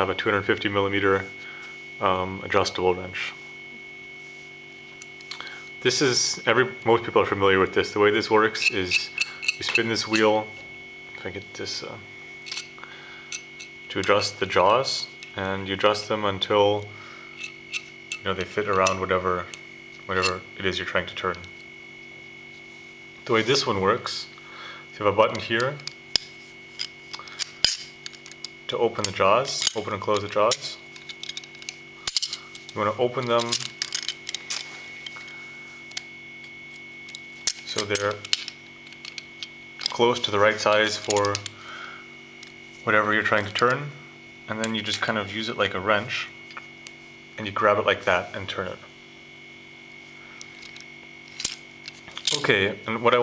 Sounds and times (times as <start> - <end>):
Speech: 0.0 - 1.4, 2.0 - 3.4, 5.8 - 10.6, 11.2 - 12.1, 13.9 - 17.0, 18.2 - 19.5, 20.1 - 21.5, 23.2 - 24.4, 25.0 - 25.9, 28.7 - 30.8, 32.8 - 33.7, 37.7 - 38.3, 39.9 - 41.4, 42.8 - 46.4, 47.4 - 48.9, 52.3 - 53.2.